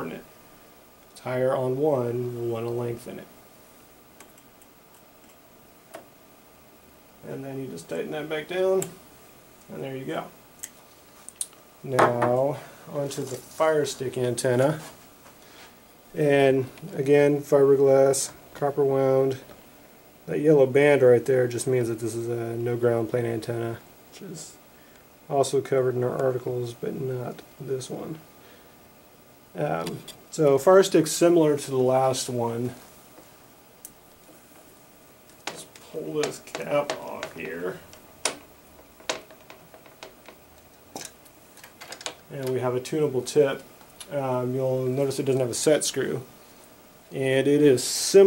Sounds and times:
Speech: 0:00.0 - 0:00.3, 0:01.2 - 0:03.3, 0:07.2 - 0:09.0, 0:09.7 - 0:10.4, 0:11.8 - 0:15.0, 0:16.2 - 0:19.5, 0:20.3 - 0:24.6, 0:25.3 - 0:28.2, 0:29.5 - 0:32.8, 0:35.5 - 0:37.9, 0:42.3 - 0:46.3, 0:47.1 - 0:48.2.

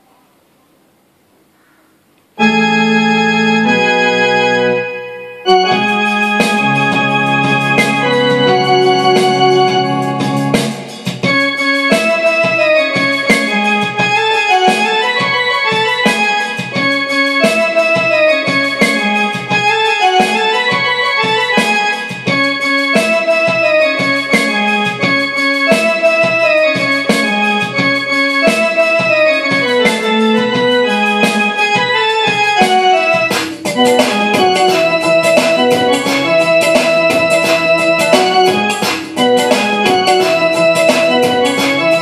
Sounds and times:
Electronic organ: 0:02.3 - 0:42.0
Piano: 0:02.4 - 0:42.0.

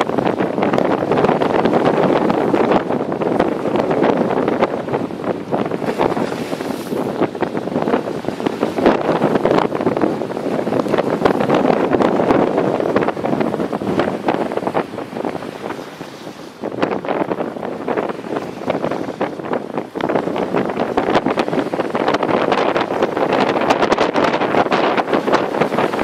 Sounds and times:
Sailboat, sailing ship: 0:00.0 - 0:26.0.

